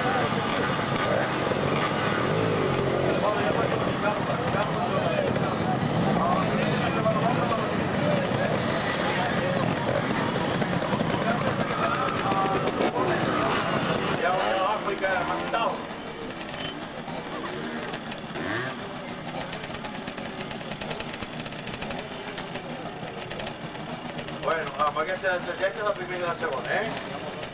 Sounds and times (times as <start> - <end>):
Speech: 3.1 - 16.0, 24.2 - 27.5.